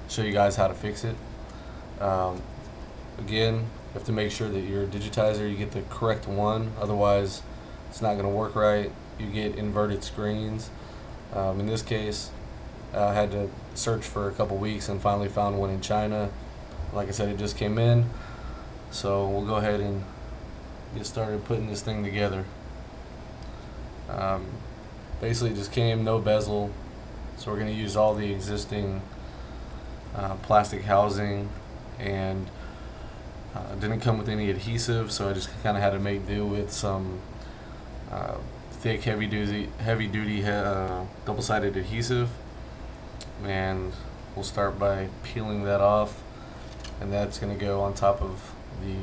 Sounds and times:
Speech: 0:00.0 - 0:01.2, 0:02.0 - 0:02.5, 0:03.2 - 0:18.2, 0:18.9 - 0:20.2, 0:20.9 - 0:22.6, 0:24.1 - 0:26.8, 0:27.4 - 0:29.1, 0:30.1 - 0:32.6, 0:33.6 - 0:37.3, 0:38.1 - 0:42.4, 0:43.2 - 0:46.2, 0:47.0 - 0:49.0.

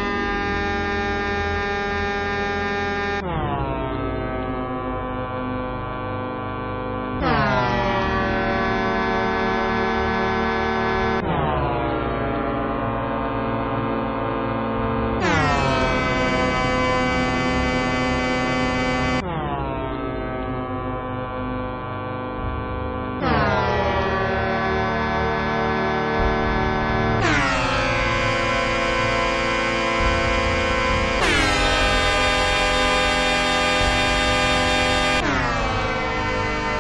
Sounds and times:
Air horn, truck horn: 0:00.0 - 0:03.2, 0:08.2 - 0:11.2, 0:15.2 - 0:19.2, 0:24.0 - 0:36.8
Music: 0:13.2 - 0:36.8.

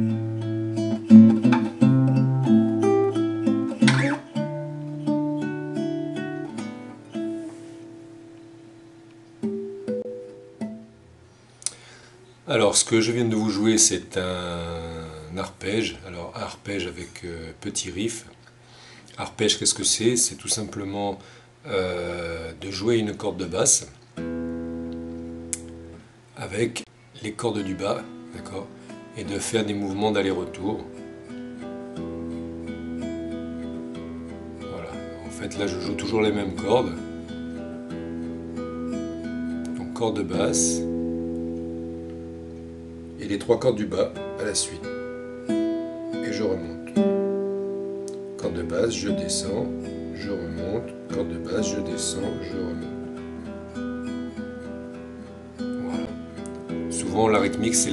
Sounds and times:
Music: 0:00.0 - 0:11.4, 0:24.2 - 0:26.1, 0:27.4 - 0:57.9
Speech: 0:12.5 - 0:18.4, 0:19.2 - 0:24.0, 0:26.4 - 0:31.0, 0:34.6 - 0:37.1, 0:39.7 - 0:40.9, 0:43.2 - 0:44.9, 0:46.2 - 0:47.0, 0:48.4 - 0:53.0, 0:55.8 - 0:56.2, 0:56.9 - 0:57.9.

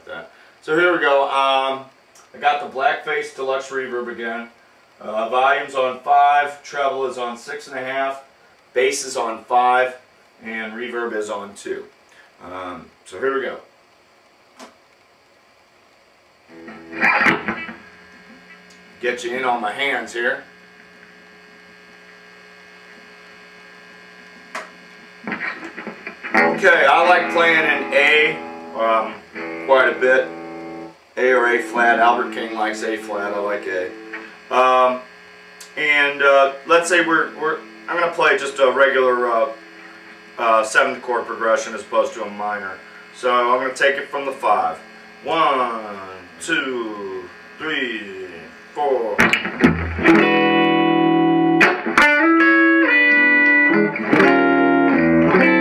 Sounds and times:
Speech: 0:00.0 - 0:13.7, 0:19.0 - 0:20.5, 0:26.6 - 0:30.3, 0:31.2 - 0:33.9, 0:34.5 - 0:39.6, 0:40.4 - 0:49.2
Electric guitar: 0:16.5 - 0:19.0, 0:24.0 - 0:43.5, 0:44.2 - 0:55.6.

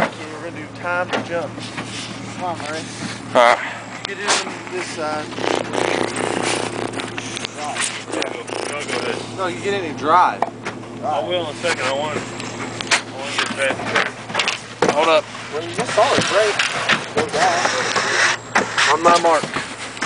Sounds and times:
Speech: 0:00.0 - 0:01.5, 0:17.2 - 0:19.5.

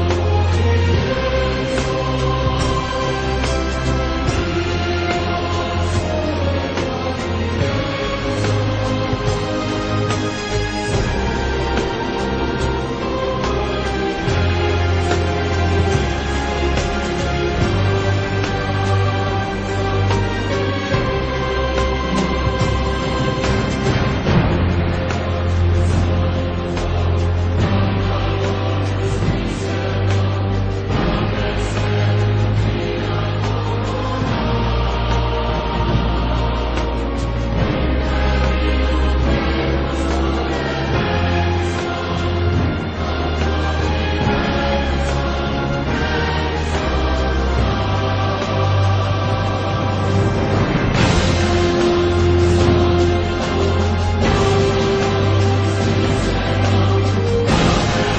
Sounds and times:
Theme music: 0:00.0 - 0:58.1.

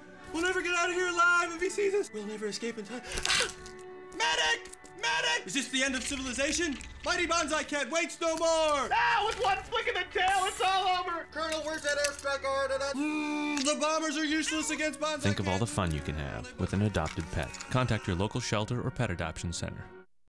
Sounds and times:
Music: 0:00.0 - 0:20.1
Speech: 0:00.3 - 0:03.0, 0:04.2 - 0:19.9.

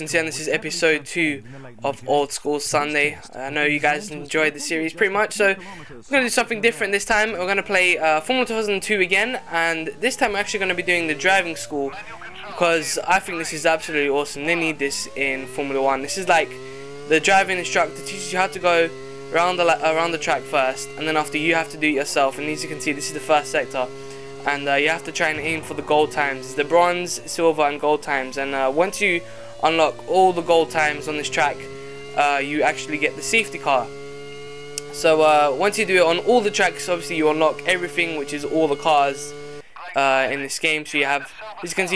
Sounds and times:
Speech: 0:00.0 - 0:33.9, 0:34.9 - 0:41.9
Car: 0:00.0 - 0:41.9.

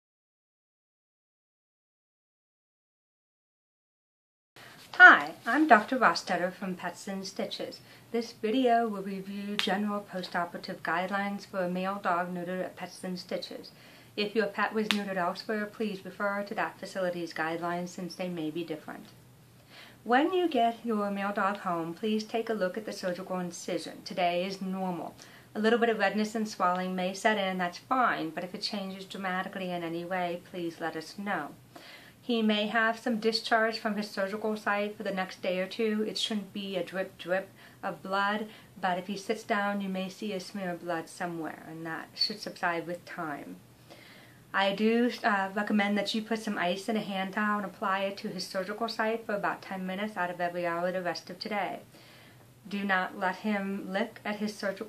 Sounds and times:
Speech: 0:04.9 - 0:19.2, 0:20.0 - 0:31.6, 0:32.2 - 0:43.6, 0:44.5 - 0:51.9, 0:52.6 - 0:54.8.

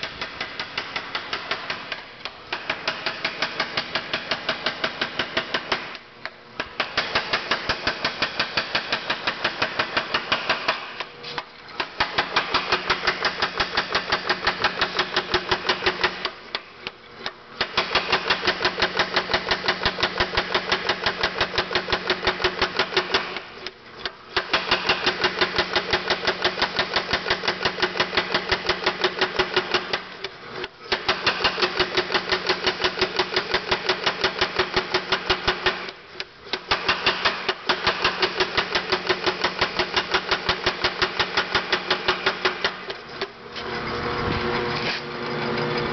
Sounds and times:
Hammer: 0:00.0 - 0:06.0, 0:06.7 - 0:11.1, 0:11.8 - 0:16.4, 0:17.6 - 0:23.4, 0:24.4 - 0:30.1, 0:30.9 - 0:36.0, 0:36.6 - 0:43.0.

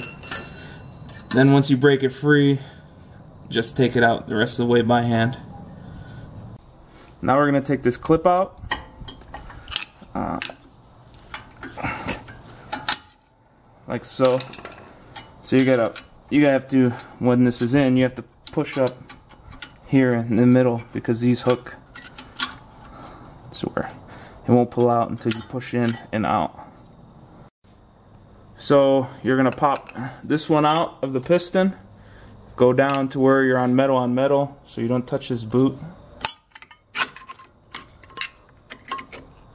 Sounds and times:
Speech: 0:01.4 - 0:02.7, 0:03.5 - 0:05.5, 0:07.2 - 0:08.6, 0:10.2 - 0:10.6, 0:13.9 - 0:14.5, 0:15.4 - 0:19.0, 0:19.9 - 0:21.8, 0:23.5 - 0:26.7, 0:28.6 - 0:31.8, 0:32.6 - 0:36.0.

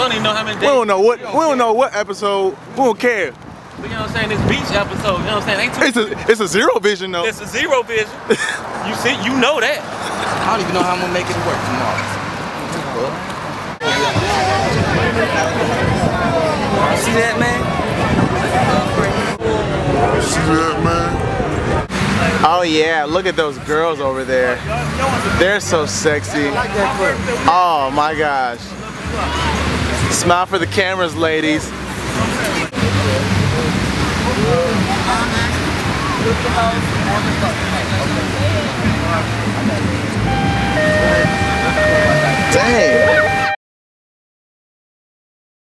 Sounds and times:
Ocean: 0:13.8 - 0:22.8, 0:31.7 - 0:43.4.

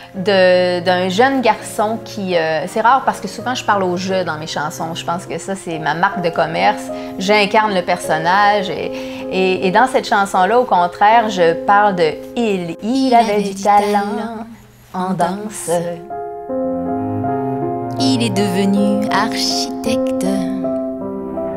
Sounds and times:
Music: 0:00.0 - 0:21.5
Speech: 0:00.2 - 0:16.1, 0:18.0 - 0:20.6.

